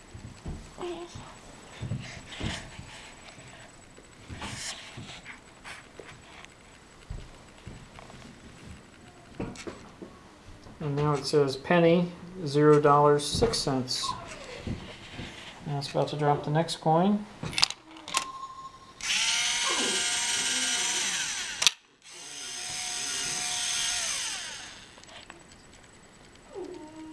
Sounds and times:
Speech: 0:10.8 - 0:14.5, 0:15.6 - 0:17.3.

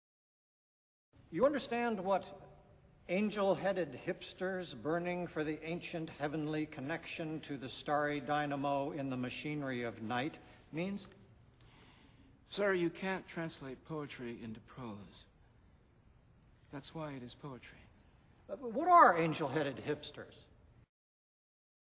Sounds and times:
Speech: 0:01.3 - 0:11.2, 0:12.5 - 0:15.3, 0:16.7 - 0:20.5.

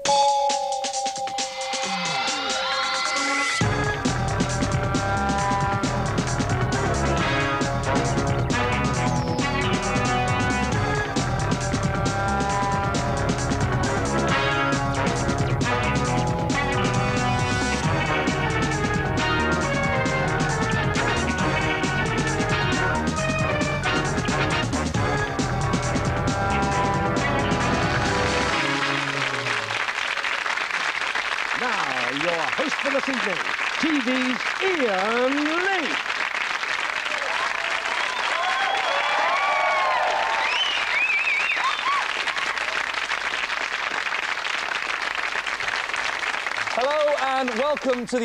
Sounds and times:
Speech: 0:31.6 - 0:36.0, 0:46.8 - 0:48.2.

